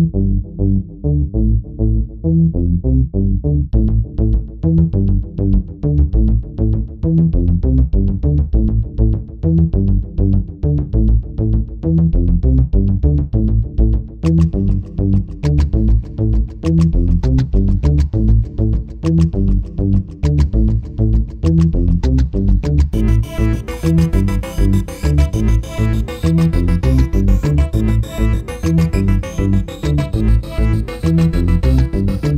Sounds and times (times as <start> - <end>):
Music: 0.0 - 32.3.